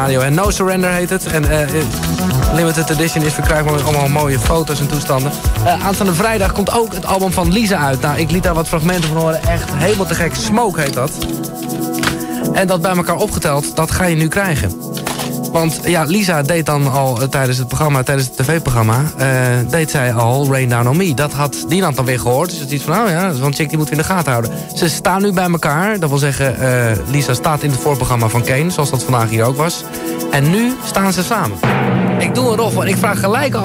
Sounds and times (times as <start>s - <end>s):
Speech: 0.0s - 11.2s, 12.5s - 14.8s, 15.5s - 33.6s
Music: 0.0s - 33.6s.